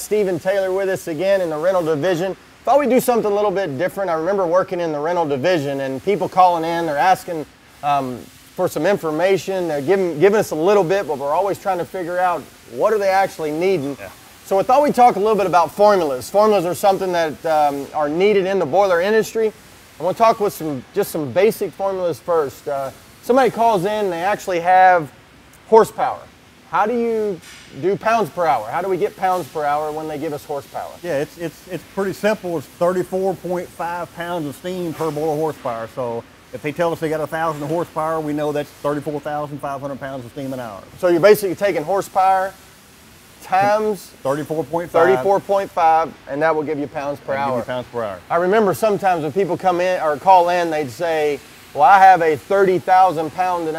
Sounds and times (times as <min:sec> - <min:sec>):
Speech: 0:00.0 - 0:25.1, 0:25.7 - 0:42.6, 0:43.4 - 0:53.7.